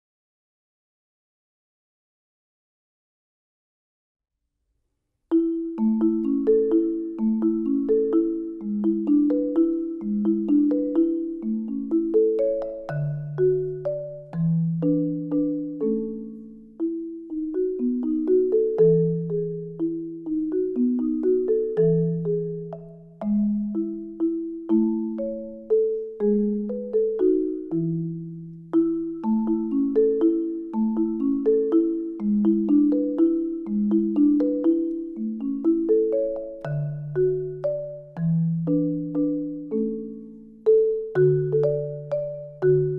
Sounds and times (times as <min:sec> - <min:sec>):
Percussion: 0:05.3 - 0:42.9.